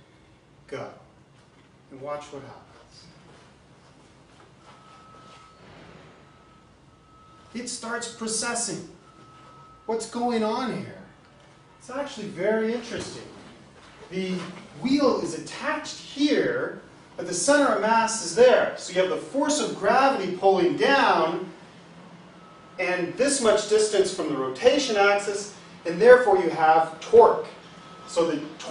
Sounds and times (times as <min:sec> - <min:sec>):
Speech: 0:00.7 - 0:01.1, 0:01.9 - 0:03.1, 0:07.5 - 0:09.0, 0:09.9 - 0:11.1, 0:11.8 - 0:13.4, 0:14.1 - 0:21.5, 0:22.8 - 0:28.7.